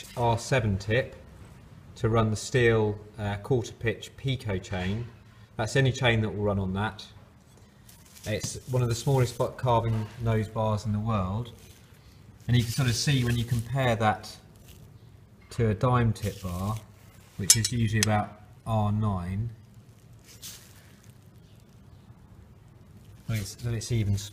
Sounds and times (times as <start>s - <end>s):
Speech: 0.0s - 1.2s, 2.0s - 7.2s, 8.2s - 11.6s, 12.5s - 14.5s, 15.5s - 19.6s, 23.2s - 24.3s.